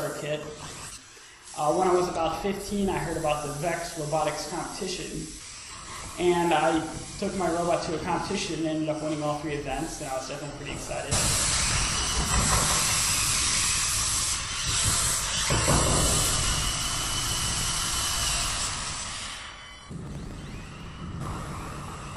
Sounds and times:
Hiss: 0:00.0 - 0:22.1.

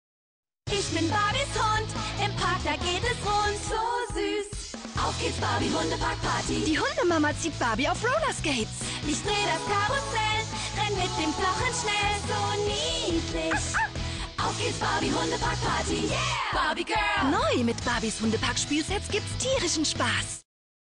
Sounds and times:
Music: 0:00.7 - 0:20.5
Speech: 0:06.7 - 0:08.7, 0:17.2 - 0:20.4.

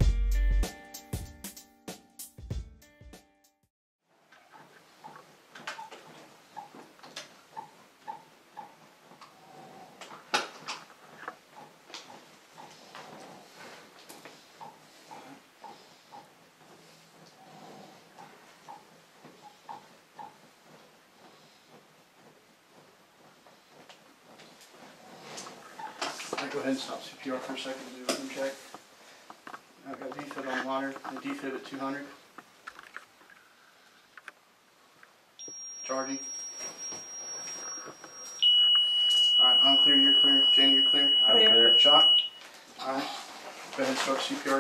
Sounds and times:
Speech: 0:26.4 - 0:28.6, 0:29.8 - 0:32.2, 0:35.9 - 0:36.3, 0:39.4 - 0:42.1, 0:42.8 - 0:44.6
Buzzer: 0:35.4 - 0:42.4.

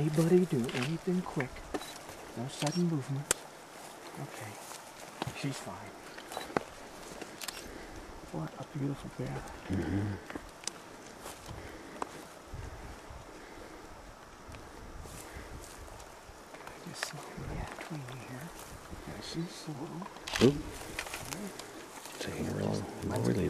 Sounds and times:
Wild animals: 0:09.3 - 0:10.4.

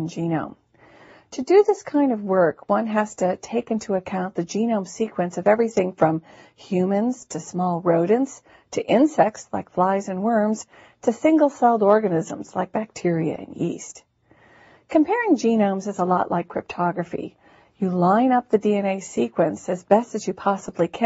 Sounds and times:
Speech: 0:00.0 - 0:00.6, 0:01.3 - 0:14.1, 0:14.9 - 0:21.0.

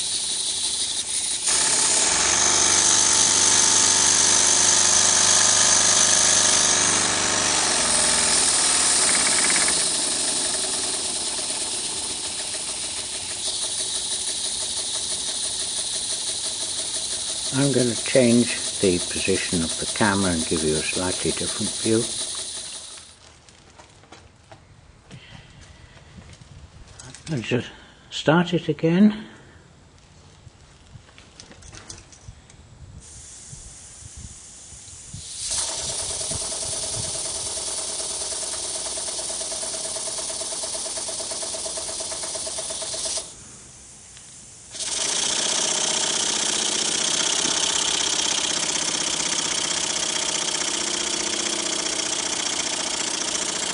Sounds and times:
Engine: 0:00.0 - 0:23.4, 0:34.4 - 0:53.7
Speech: 0:17.5 - 0:22.1, 0:27.3 - 0:29.3.

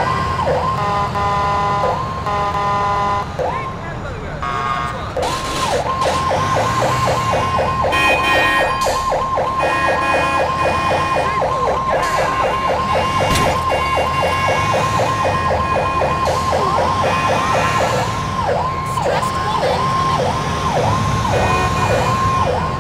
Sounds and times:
Fire engine, fire truck (siren): 0:00.0 - 0:22.8.

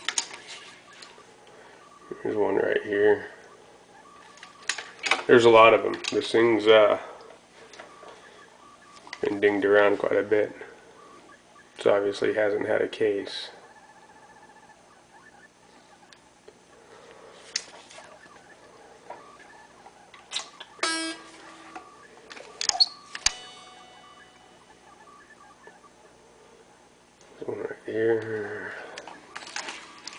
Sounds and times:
Guitar: 0:20.3 - 0:25.3.

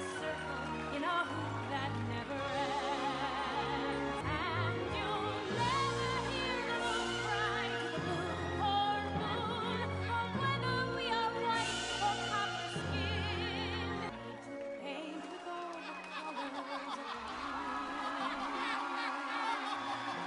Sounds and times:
Music: 0:00.0 - 0:20.2.

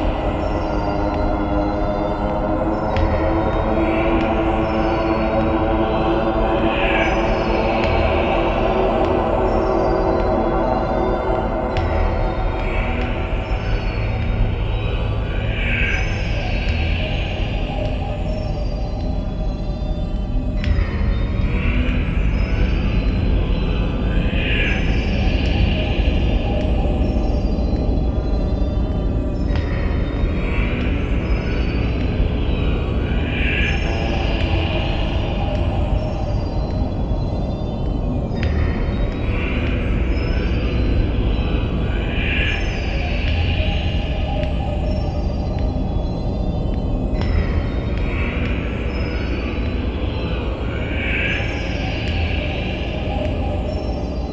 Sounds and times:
Music: 0:00.0 - 0:54.3.

